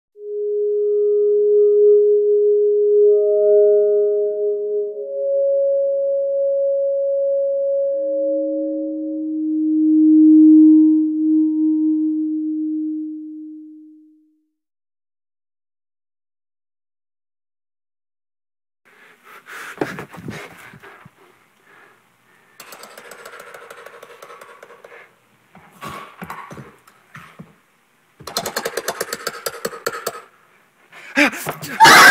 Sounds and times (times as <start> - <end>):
Music: 0.2 - 14.5.